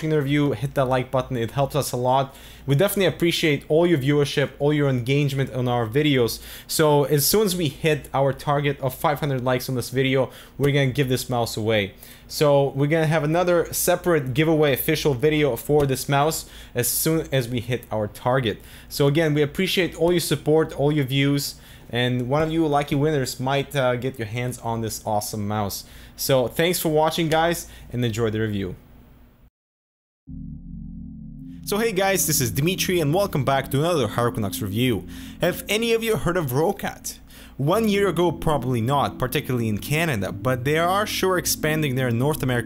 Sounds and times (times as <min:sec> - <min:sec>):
Speech: 0:00.0 - 0:28.8, 0:31.7 - 0:42.6.